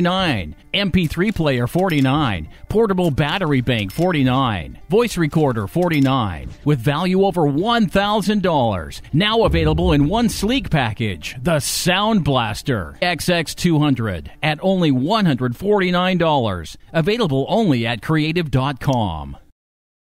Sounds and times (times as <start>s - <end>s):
Speech: 0.0s - 19.5s.